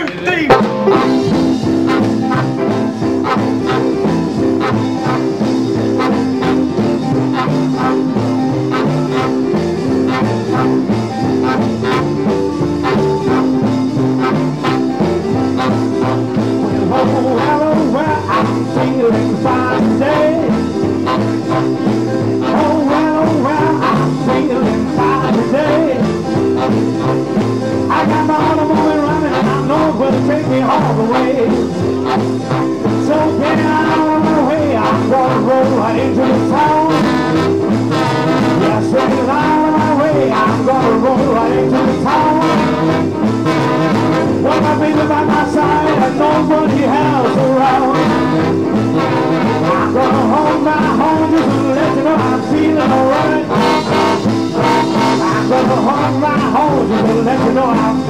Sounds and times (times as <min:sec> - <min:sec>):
Music: 0:00.0 - 0:58.0.